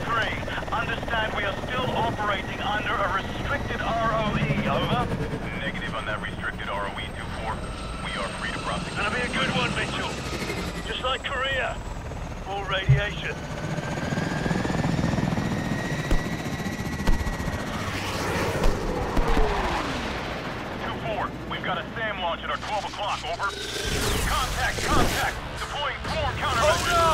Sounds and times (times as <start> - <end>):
Helicopter: 0.0 - 27.1.